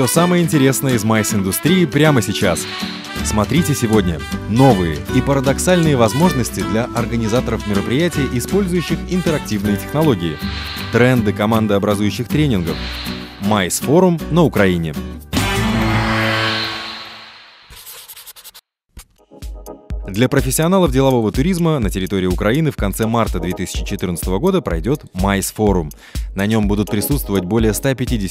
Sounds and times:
Speech: 0.0 - 2.6, 3.2 - 12.8, 13.4 - 15.0, 20.1 - 28.3
Music: 0.0 - 17.1, 19.0 - 28.3.

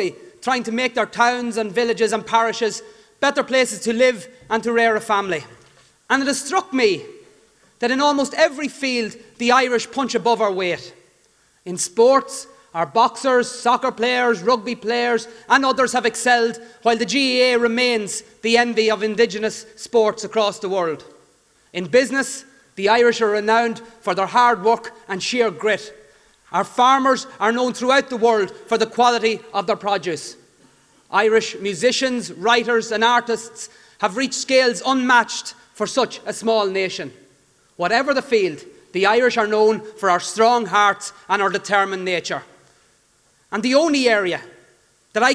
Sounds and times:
Male speech, man speaking: 0.0 - 7.2, 7.8 - 11.0, 11.7 - 21.1, 21.8 - 30.4, 31.1 - 37.2, 37.8 - 42.5, 43.5 - 44.6
Narration, monologue: 0.0 - 45.3.

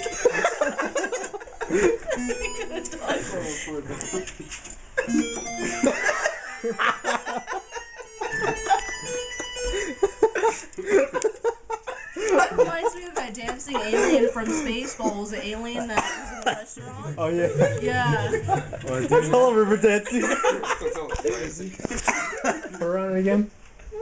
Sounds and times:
Music: 0.0 - 0.6, 1.7 - 4.4, 5.1 - 10.6.

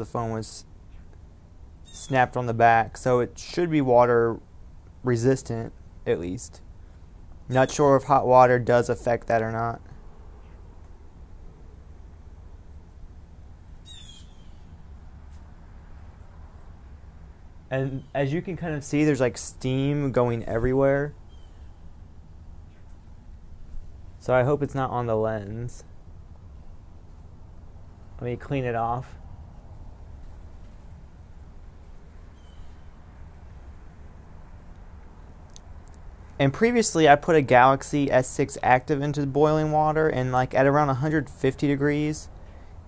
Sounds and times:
Speech: 0.0 - 0.7, 2.0 - 4.4, 5.0 - 6.6, 7.5 - 9.9, 17.7 - 21.2, 24.2 - 25.9, 28.2 - 29.2, 36.4 - 42.3.

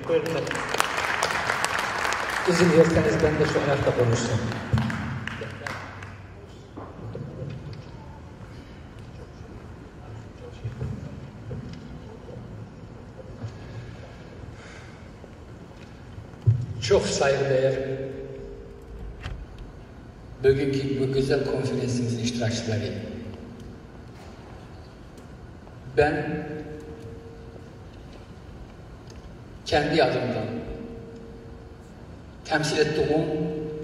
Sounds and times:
Male speech, man speaking: 0.0 - 0.6, 2.5 - 4.6, 16.8 - 18.1, 20.4 - 23.2, 26.0 - 26.6, 29.7 - 30.7, 32.5 - 33.6.

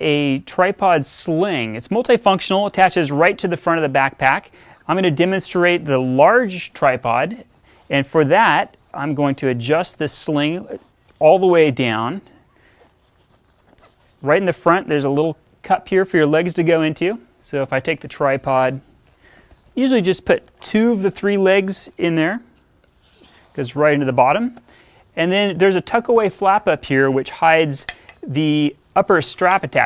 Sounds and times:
Speech: 0.0 - 12.3, 14.2 - 18.8, 19.8 - 22.5, 23.6 - 24.6, 25.2 - 29.8.

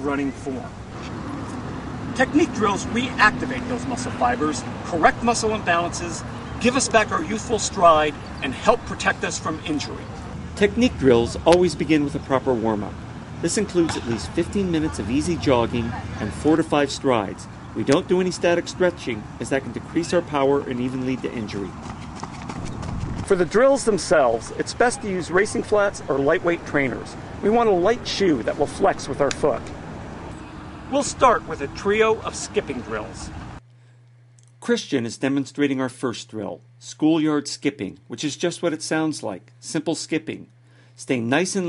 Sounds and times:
Speech: 0.0 - 0.7, 2.2 - 21.7, 23.3 - 29.6, 30.9 - 33.3, 34.6 - 41.6
Outside, urban or manmade: 0.0 - 35.7, 36.6 - 41.6.

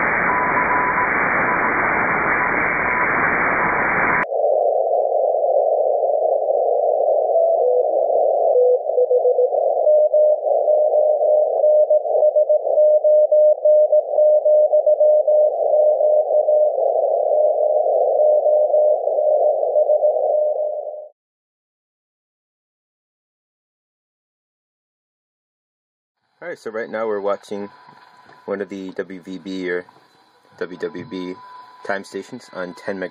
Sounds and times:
Dial tone: 0.0 - 3.3, 5.4 - 21.2.

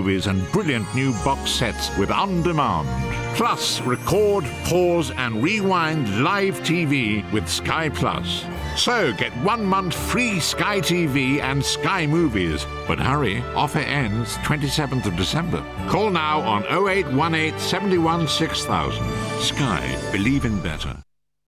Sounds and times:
Music: 0.0 - 21.1
Speech: 0.0 - 21.1.

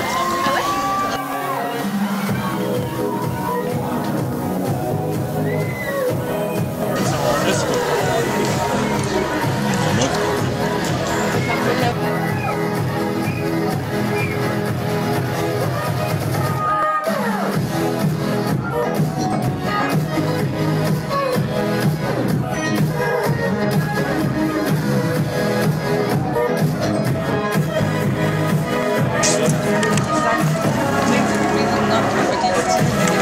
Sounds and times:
Speech: 0.0 - 4.2, 6.9 - 12.6, 29.0 - 33.2
Music: 0.0 - 33.2.

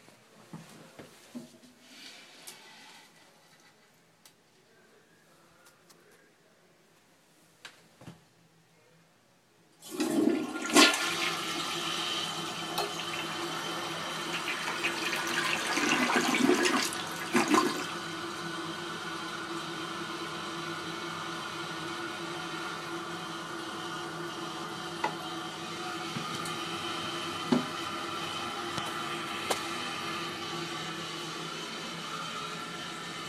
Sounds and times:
Toilet flush: 9.8 - 33.2.

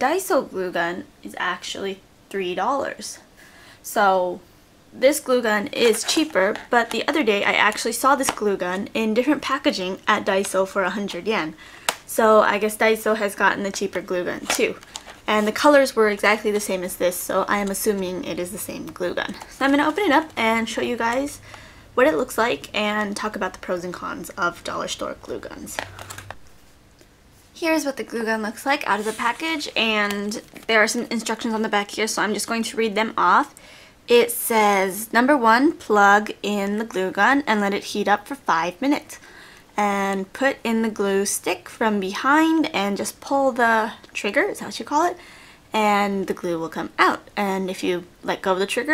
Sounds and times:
Speech: 0.0 - 3.2, 3.8 - 4.4, 5.0 - 21.4, 22.0 - 25.9, 27.6 - 39.2, 39.8 - 48.9.

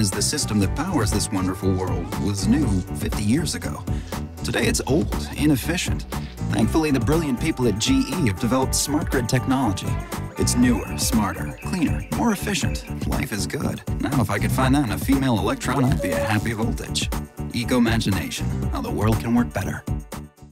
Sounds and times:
Speech: 0.0 - 19.8
Music: 0.0 - 20.5.

